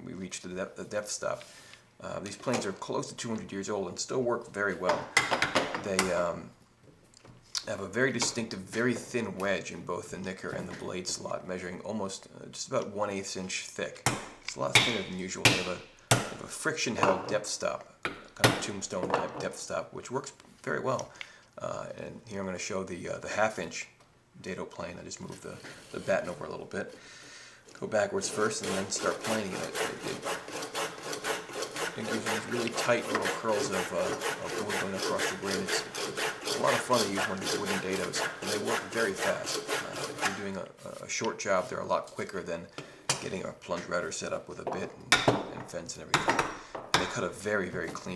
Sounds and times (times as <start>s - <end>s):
Wood: 28.2s - 40.4s
Filing (rasp): 28.2s - 40.5s
Rub: 28.2s - 41.1s.